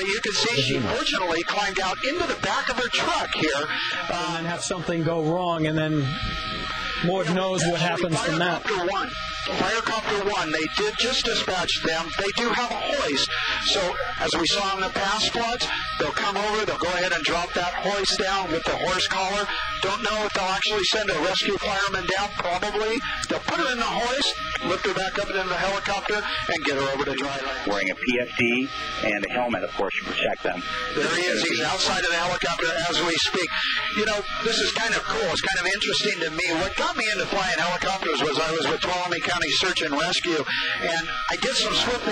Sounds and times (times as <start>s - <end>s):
Speech: 0.0s - 6.1s, 7.0s - 42.1s
Helicopter: 7.2s - 27.3s.